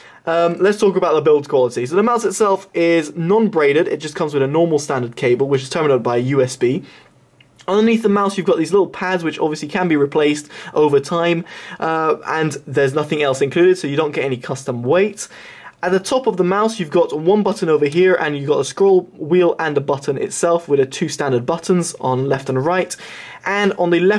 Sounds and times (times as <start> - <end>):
Speech: 0.2 - 6.9, 7.6 - 24.1.